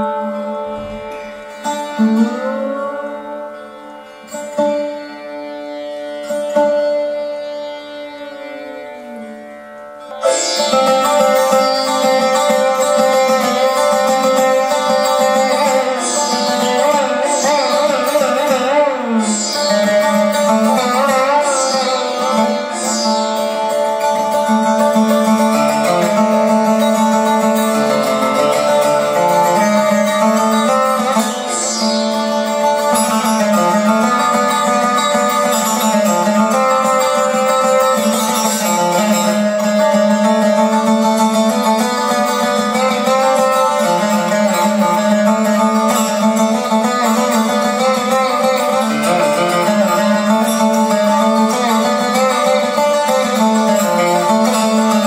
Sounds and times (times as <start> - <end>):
Carnatic music: 0.0 - 55.0
Sitar: 0.0 - 55.0.